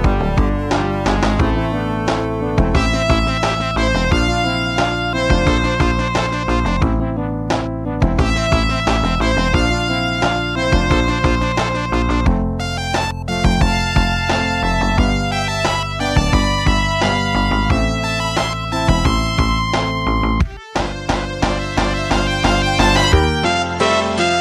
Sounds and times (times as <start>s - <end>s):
Music: 0.0s - 24.4s.